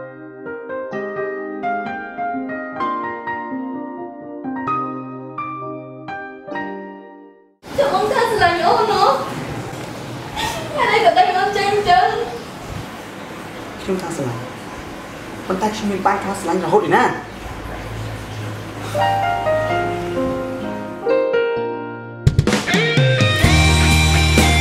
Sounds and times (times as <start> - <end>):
Music: 0.0 - 7.6, 19.0 - 24.6
Speech: 7.8 - 9.3, 10.7 - 12.4, 13.8 - 14.5, 15.5 - 17.3.